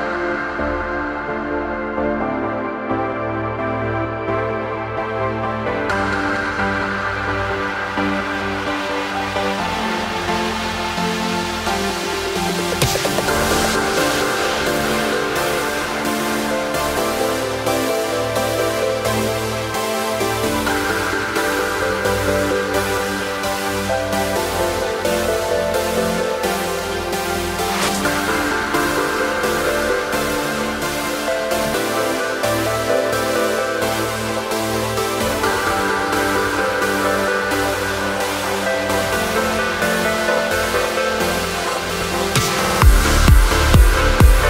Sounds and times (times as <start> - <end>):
Electronic dance music: 0.0 - 44.4.